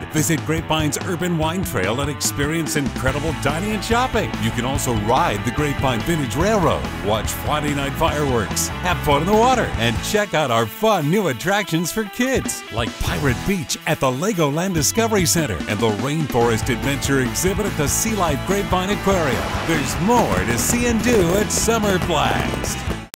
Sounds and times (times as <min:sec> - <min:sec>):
Music: 0:00.0 - 0:23.1
Speech: 0:00.1 - 0:22.9.